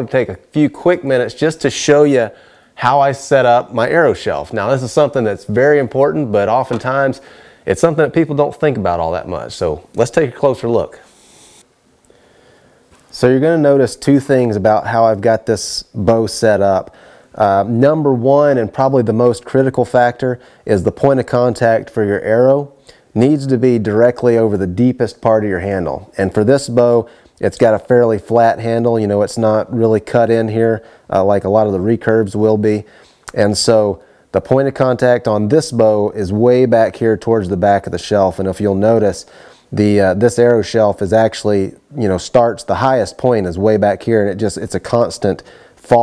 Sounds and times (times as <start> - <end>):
Speech: 0.0 - 11.1, 13.1 - 46.0.